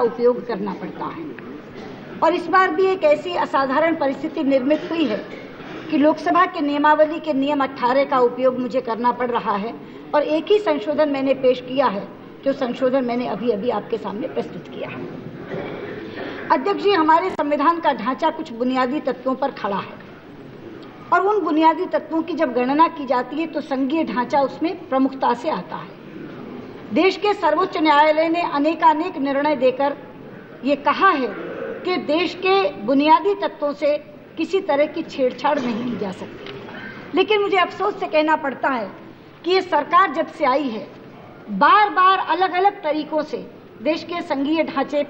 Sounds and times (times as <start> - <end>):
Female speech, woman speaking: 0.0 - 1.4, 2.2 - 15.1, 16.5 - 20.0, 21.1 - 25.9, 26.9 - 30.0, 30.6 - 36.4, 37.1 - 45.0
Narration, monologue: 0.0 - 45.0.